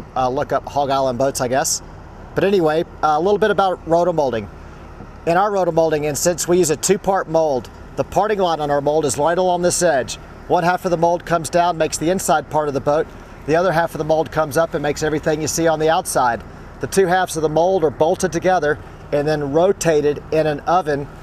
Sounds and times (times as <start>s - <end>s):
Speech: 0.0s - 1.8s, 2.4s - 4.5s, 5.2s - 21.1s.